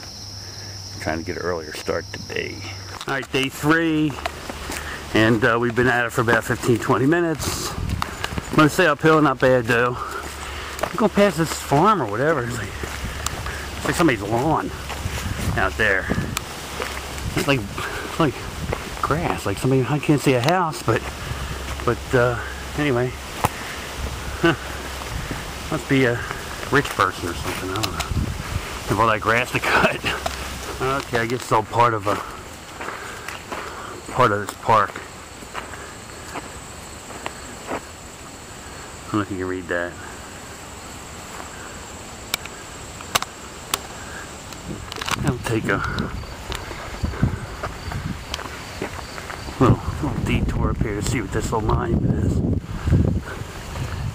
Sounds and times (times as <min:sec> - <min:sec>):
Outside, rural or natural: 0:00.0 - 0:54.1
Speech: 0:01.0 - 0:04.2, 0:05.1 - 0:07.8, 0:08.5 - 0:10.2, 0:10.9 - 0:12.8, 0:13.8 - 0:14.8, 0:15.6 - 0:16.3, 0:17.3 - 0:18.4, 0:19.0 - 0:21.1, 0:21.8 - 0:23.2, 0:25.7 - 0:28.1, 0:28.9 - 0:32.4, 0:34.1 - 0:35.0, 0:39.1 - 0:40.1, 0:45.2 - 0:46.1, 0:49.6 - 0:52.4.